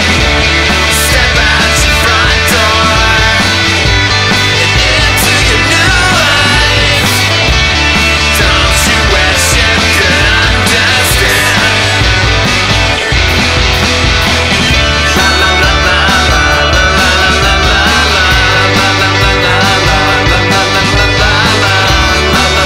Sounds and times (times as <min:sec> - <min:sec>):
Singing: 0:00.0 - 0:12.2, 0:14.8 - 0:22.6
Psychedelic rock: 0:00.0 - 0:22.6.